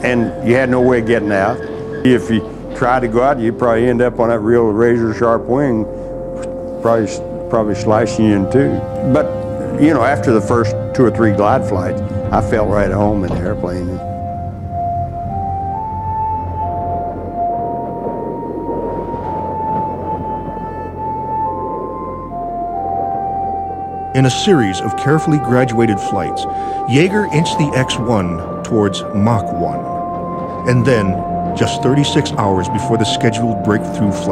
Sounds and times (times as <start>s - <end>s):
Speech: 0.0s - 5.9s, 6.8s - 14.0s, 24.2s - 30.0s, 30.7s - 34.3s
Music: 0.0s - 34.3s.